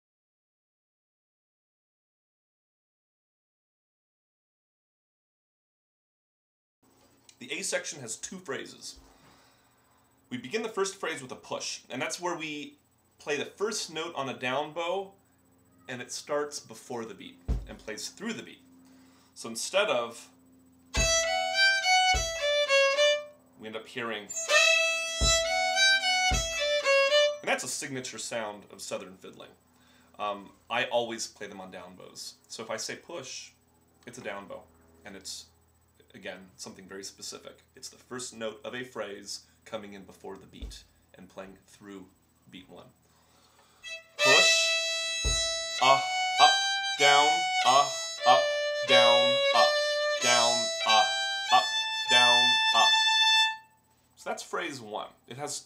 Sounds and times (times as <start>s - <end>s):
Speech: 7.3s - 9.0s, 10.3s - 15.1s, 15.8s - 18.6s, 19.4s - 20.4s, 23.6s - 24.3s, 27.4s - 29.6s, 30.2s - 43.0s, 44.2s - 44.5s, 45.8s - 46.0s, 47.0s - 49.5s, 50.2s - 51.1s, 52.1s - 52.9s, 54.2s - 55.6s
Violin, fiddle: 21.0s - 23.3s, 24.3s - 27.4s, 43.8s - 53.6s.